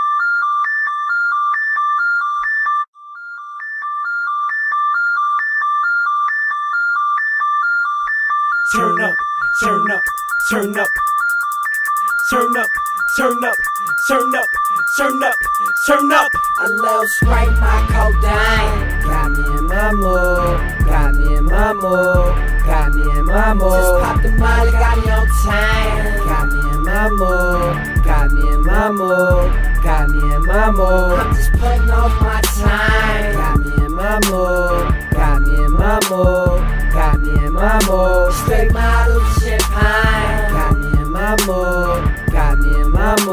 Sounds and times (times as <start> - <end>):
Pop music: 8.7 - 43.3.